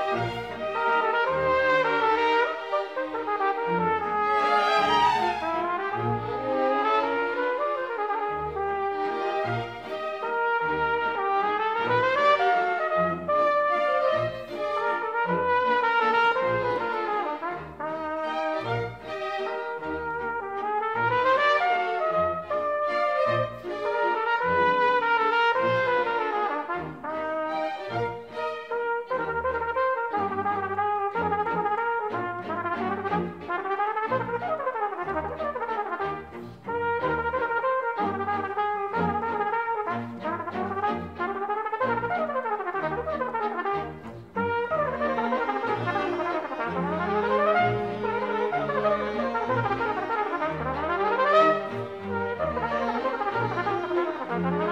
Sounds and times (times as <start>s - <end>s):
Bowed string instrument: 0.0s - 54.7s
Classical music: 0.0s - 54.7s
Orchestra: 0.0s - 54.7s
Trumpet: 0.0s - 54.7s.